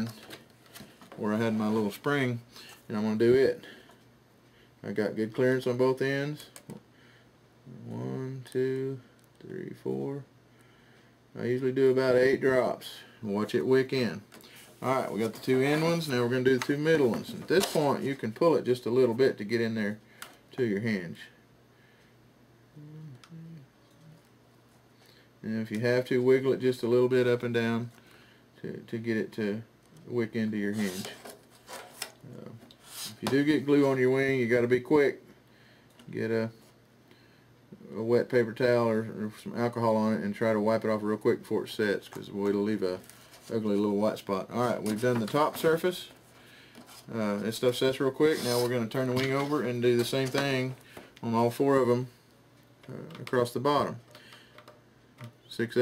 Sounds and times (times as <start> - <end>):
Inside, small room: 0.0 - 55.8
Speech: 1.2 - 3.7, 4.8 - 6.6, 7.7 - 10.3, 11.4 - 21.4, 25.4 - 27.9, 28.6 - 31.2, 32.2 - 35.2, 36.1 - 36.6, 37.7 - 46.2, 47.1 - 52.2, 52.9 - 54.0, 55.5 - 55.8.